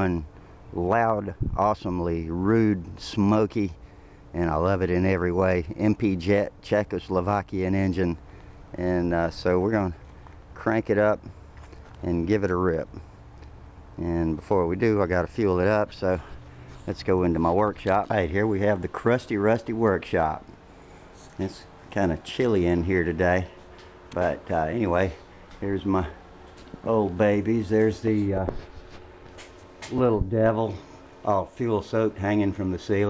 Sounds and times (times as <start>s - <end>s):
Speech: 0.0s - 10.0s, 10.6s - 11.3s, 12.0s - 13.0s, 14.0s - 20.5s, 21.4s - 28.7s, 29.9s - 33.0s.